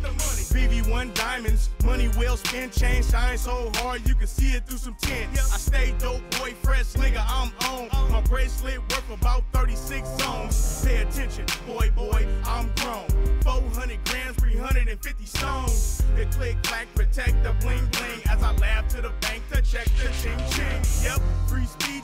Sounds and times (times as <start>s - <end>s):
Pop music: 0.0s - 22.0s.